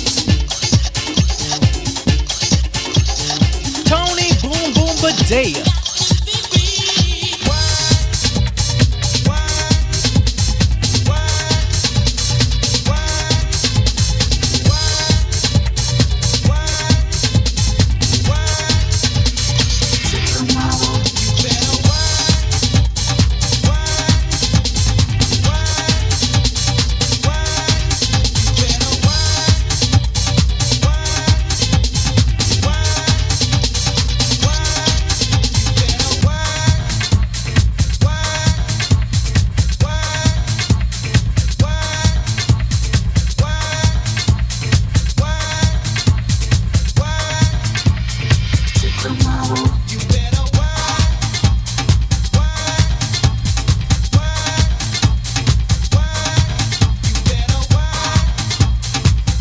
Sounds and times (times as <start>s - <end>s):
Disco: 0.0s - 59.4s.